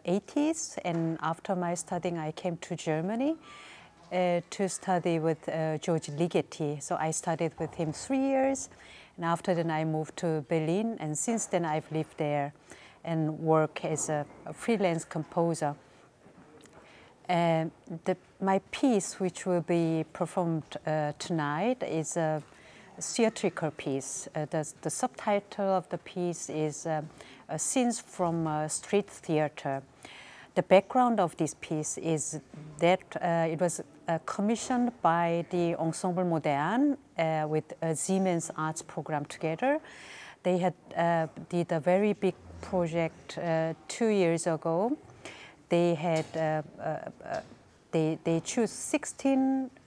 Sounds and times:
Speech: 0.0s - 3.4s, 4.1s - 15.8s, 17.3s - 22.4s, 23.0s - 29.8s, 30.6s - 39.8s, 40.5s - 45.0s, 45.7s - 49.7s.

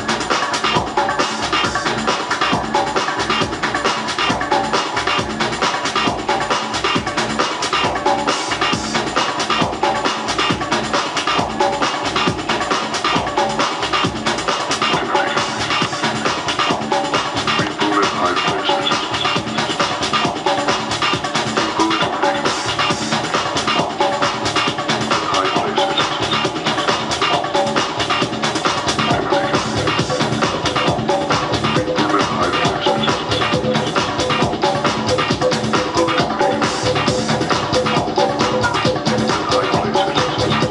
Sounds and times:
Techno: 0.0s - 40.7s.

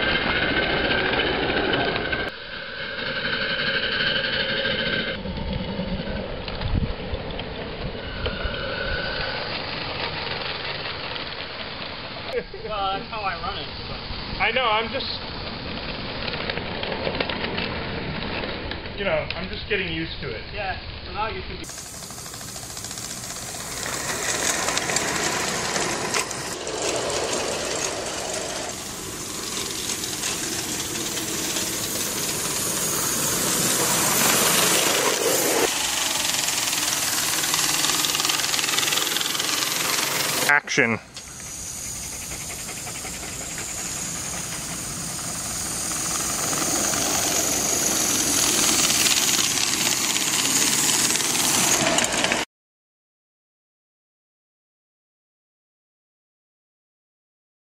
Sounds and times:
Speech: 12.3s - 13.7s, 14.4s - 15.2s, 19.0s - 21.7s, 40.5s - 41.1s.

